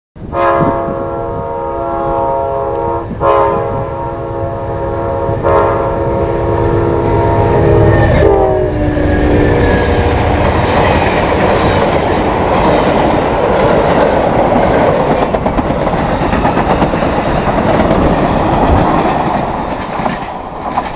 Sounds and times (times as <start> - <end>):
Train whistle: 0.2 - 10.5.